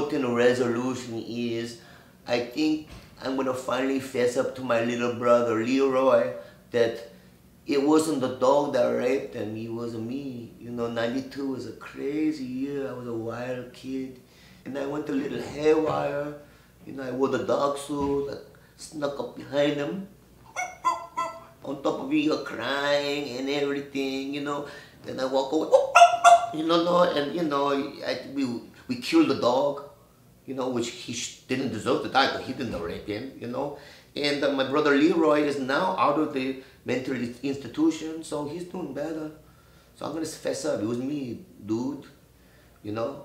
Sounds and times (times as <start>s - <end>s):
Speech: 0.0s - 7.1s, 7.7s - 20.2s, 21.6s - 25.8s, 26.6s - 39.4s, 40.0s - 42.2s, 42.8s - 43.2s.